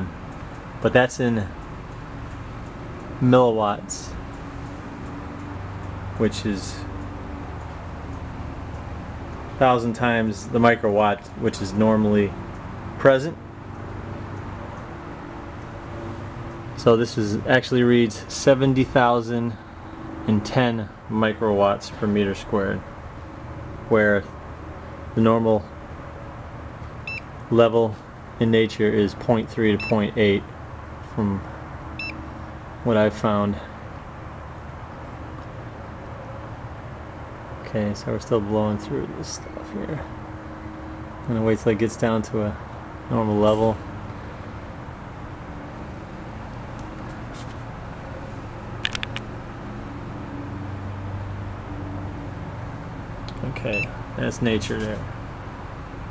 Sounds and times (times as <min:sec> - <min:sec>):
Speech: 0:00.8 - 0:01.6, 0:03.2 - 0:04.2, 0:06.2 - 0:06.9, 0:09.6 - 0:12.4, 0:13.0 - 0:13.4, 0:16.8 - 0:19.6, 0:20.3 - 0:22.8, 0:23.9 - 0:24.3, 0:25.2 - 0:25.7, 0:27.5 - 0:30.5, 0:31.1 - 0:31.5, 0:32.8 - 0:33.7, 0:37.6 - 0:40.1, 0:41.3 - 0:43.8, 0:53.4 - 0:55.1.